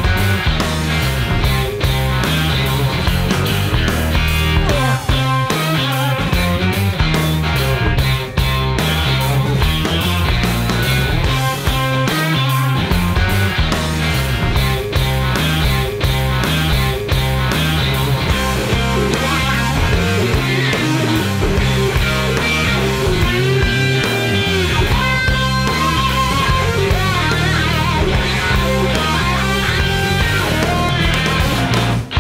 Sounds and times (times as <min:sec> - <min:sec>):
Guitar: 0:00.0 - 0:32.2.